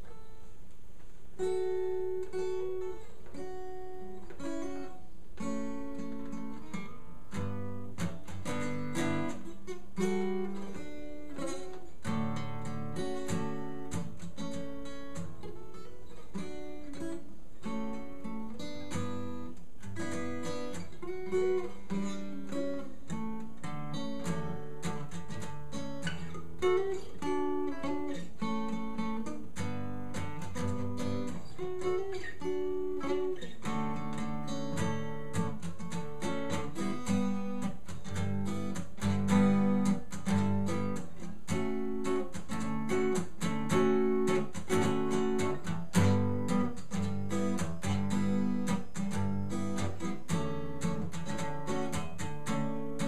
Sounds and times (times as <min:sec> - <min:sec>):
Acoustic guitar: 0:00.0 - 0:53.0.